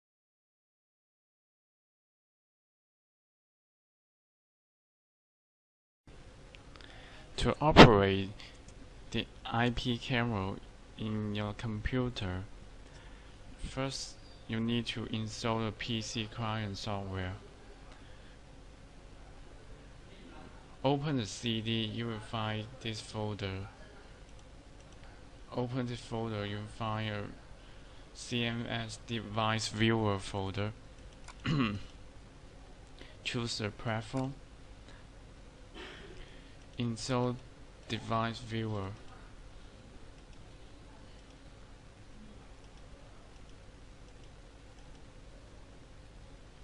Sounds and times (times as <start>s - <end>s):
Speech: 7.4s - 8.5s, 9.1s - 12.5s, 13.6s - 17.9s, 19.3s - 24.2s, 25.5s - 27.5s, 28.2s - 30.8s, 33.2s - 34.4s, 36.8s - 39.4s.